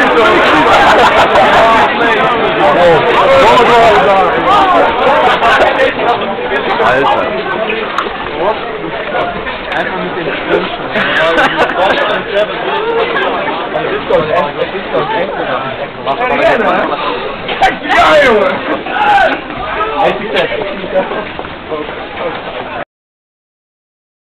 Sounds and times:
Speech: 0.0s - 22.8s.

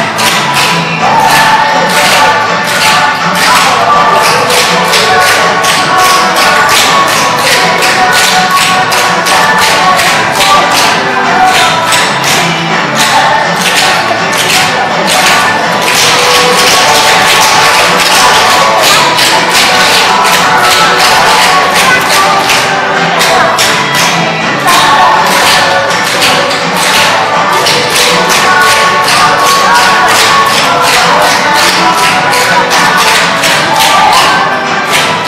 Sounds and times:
Inside, large room or hall: 0.0s - 35.2s
Music: 0.0s - 35.2s
Speech: 0.0s - 35.2s.

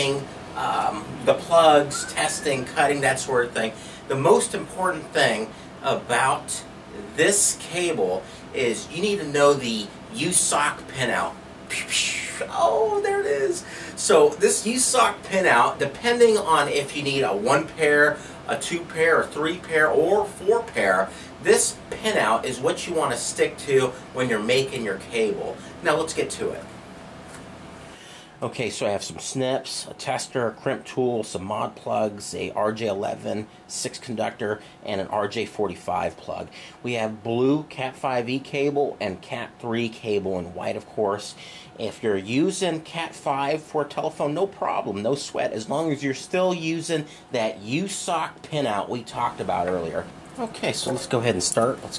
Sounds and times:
Speech: 0.0s - 26.7s, 28.4s - 51.9s.

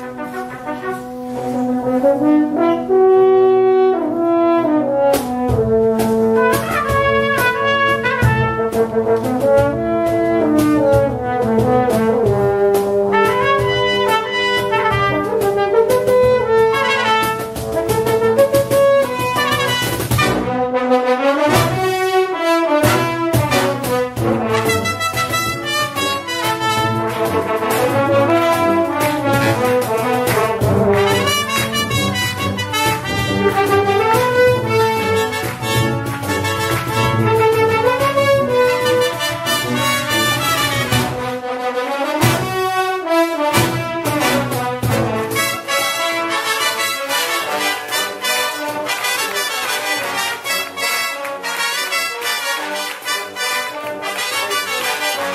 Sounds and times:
Trombone: 0.0s - 55.3s
Trumpet: 0.0s - 55.3s.

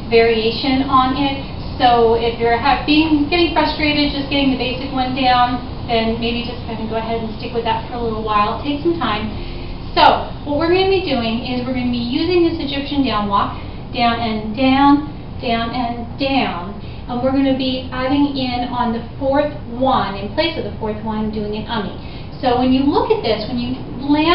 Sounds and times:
Speech: 0.1s - 9.3s, 10.0s - 24.3s.

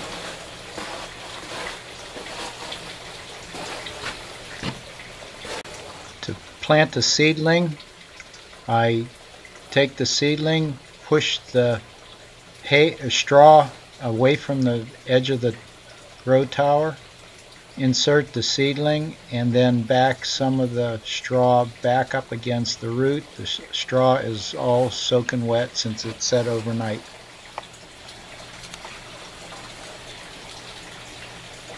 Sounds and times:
Speech: 6.2s - 7.8s, 8.7s - 9.1s, 9.7s - 11.8s, 12.6s - 15.6s, 16.2s - 17.0s, 17.8s - 27.0s.

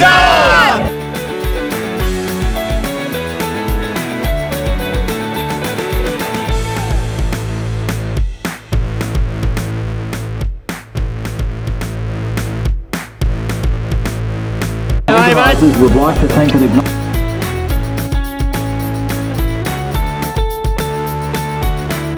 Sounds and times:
Music: 0.0s - 22.1s
Speech: 15.1s - 16.9s.

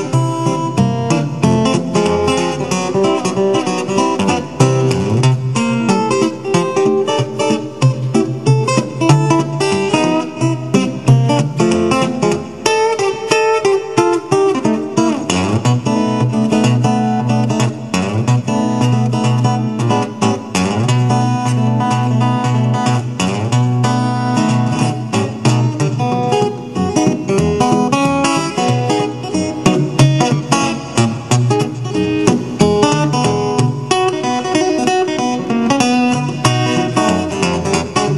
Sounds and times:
Music: 0.0s - 38.1s.

